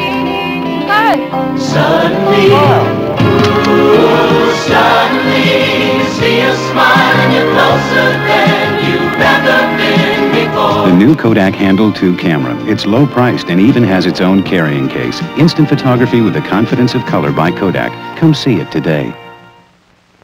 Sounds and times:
Music: 0.0s - 20.2s
Speech: 10.9s - 19.2s.

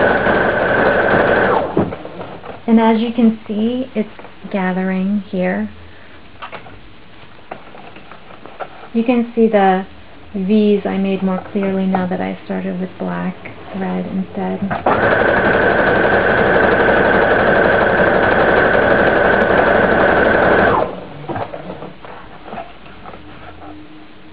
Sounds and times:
Speech: 2.7s - 5.8s, 8.9s - 14.8s.

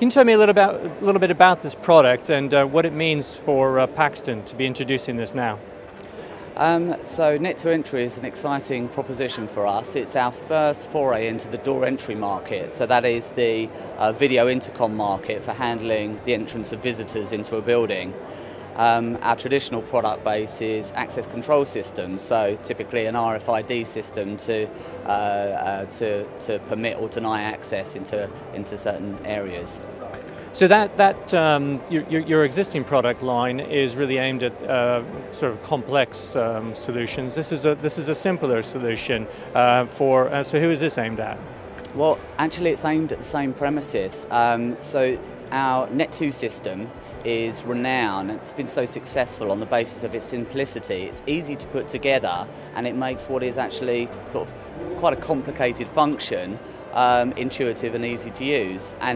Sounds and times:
Speech: 0.0s - 5.6s, 6.6s - 18.2s, 18.8s - 29.8s, 30.6s - 59.1s
Music: 0.0s - 59.1s.

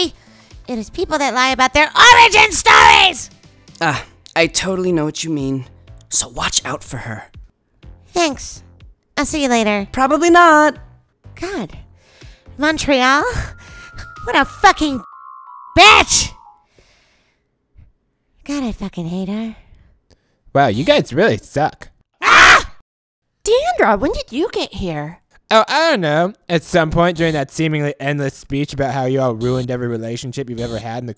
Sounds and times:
Music: 0.0s - 16.7s
Speech: 23.5s - 31.1s.

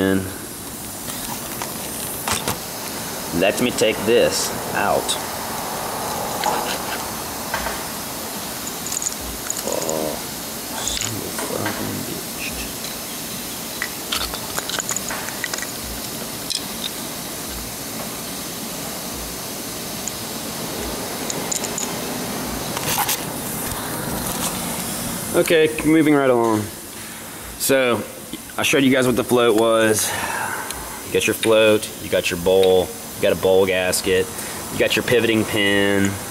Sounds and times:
Speech: 0.0s - 0.4s, 3.3s - 5.2s, 9.6s - 10.2s, 10.8s - 12.7s, 25.3s - 26.8s, 27.6s - 30.2s, 31.1s - 36.2s.

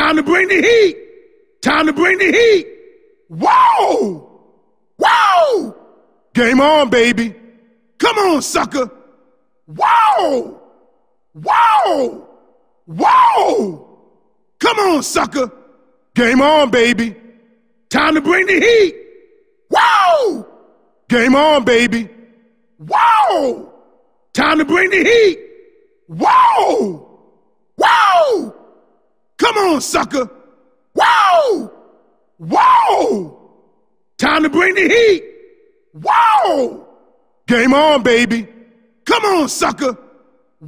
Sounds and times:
Speech: 0.0s - 1.0s, 1.6s - 2.7s, 6.4s - 7.4s, 8.0s - 9.0s, 14.6s - 15.6s, 16.2s - 17.2s, 17.9s - 19.0s, 21.1s - 22.1s, 24.4s - 25.4s, 29.4s - 30.3s, 34.2s - 35.2s, 36.0s - 36.8s, 37.5s - 38.5s, 39.1s - 40.0s.

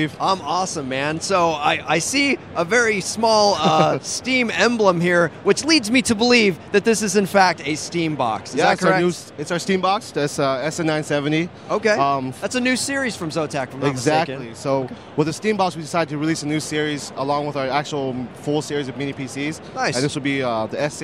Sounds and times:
Speech: 0.0s - 21.0s.

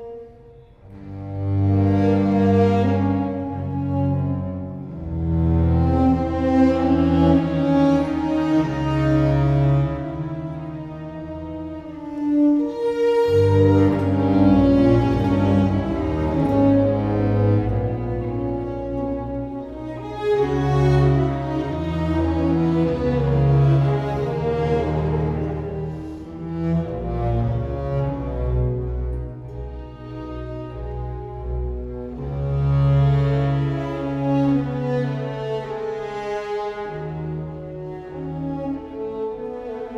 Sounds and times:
Cello: 0.0s - 39.9s.

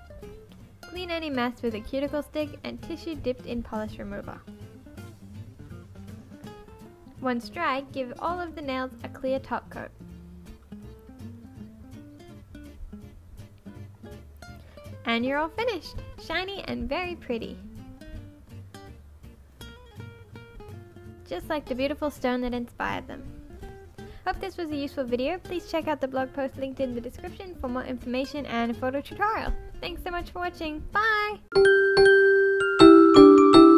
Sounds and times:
Music: 0.0s - 33.7s
Speech: 0.9s - 4.4s, 7.2s - 9.9s, 15.1s - 17.7s, 21.3s - 23.3s, 24.3s - 31.4s.

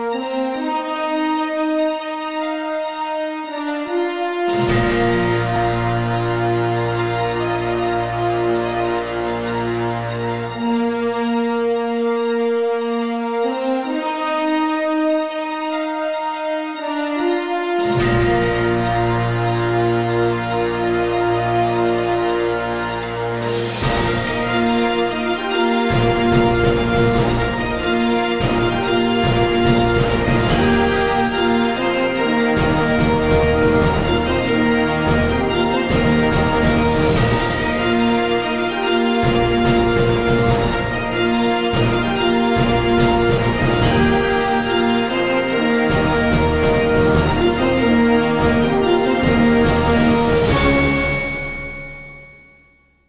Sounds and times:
Music: 0.0s - 53.0s.

